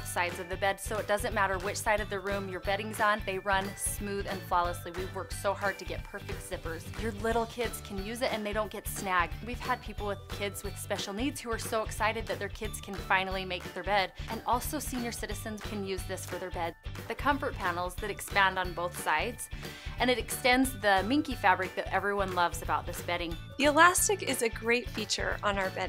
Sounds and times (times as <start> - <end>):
Music: 0.0 - 25.8
Speech: 0.0 - 25.8.